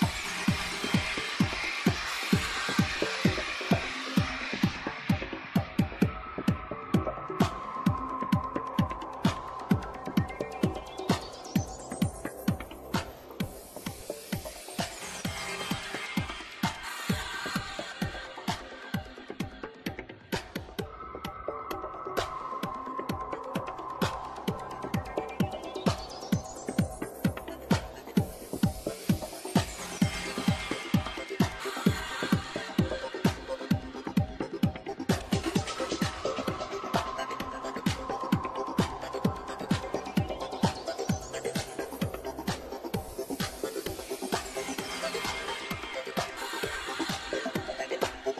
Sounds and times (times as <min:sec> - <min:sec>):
Music: 0:00.0 - 0:48.4.